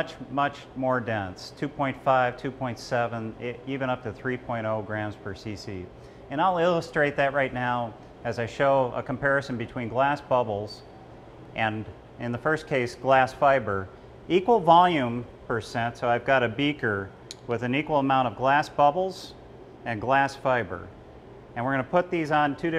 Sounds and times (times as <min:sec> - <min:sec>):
Speech: 0:00.0 - 0:10.9, 0:11.6 - 0:21.0, 0:21.6 - 0:22.7.